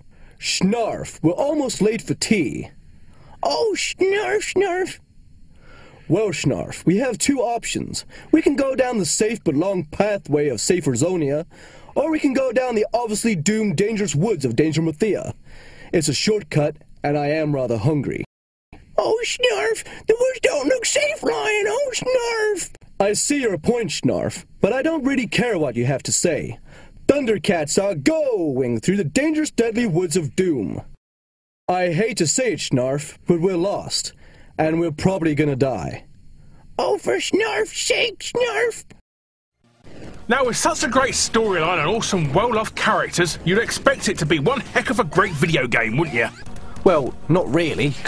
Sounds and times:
Speech: 0.4s - 2.8s, 3.4s - 5.0s, 6.1s - 18.3s, 19.0s - 30.9s, 31.7s - 36.1s, 36.8s - 39.0s, 40.3s - 48.0s.

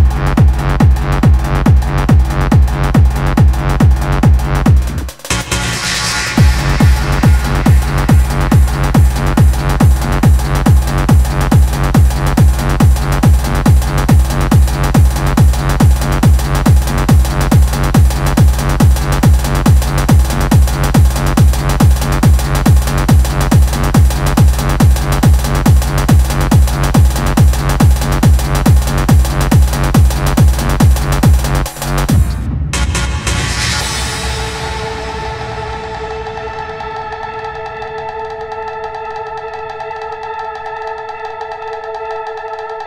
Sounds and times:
Techno: 0.0s - 42.8s
Pop music: 5.2s - 10.0s.

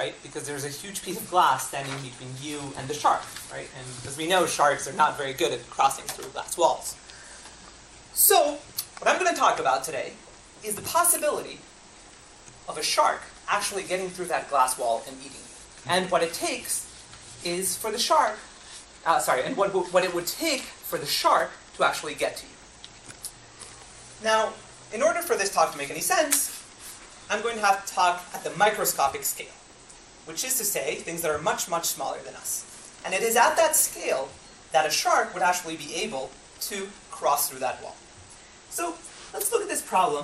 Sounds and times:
Speech: 0.0s - 7.0s, 8.2s - 11.7s, 12.7s - 22.6s, 24.2s - 26.6s, 27.3s - 29.6s, 30.3s - 38.0s, 38.7s - 40.2s.

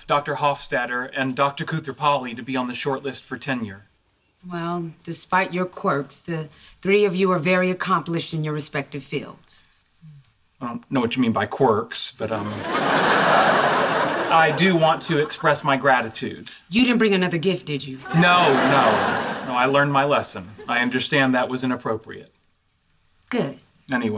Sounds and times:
Speech: 14.3s - 22.3s, 23.3s - 24.1s.

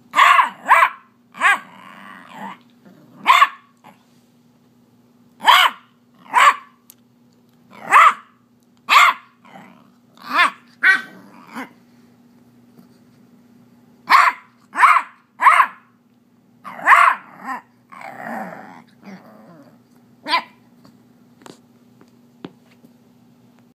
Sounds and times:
Bark: 0.2s - 1.7s, 3.2s - 3.7s, 5.4s - 6.8s, 7.8s - 9.4s, 14.1s - 15.9s, 16.7s - 17.3s, 20.3s - 20.6s.

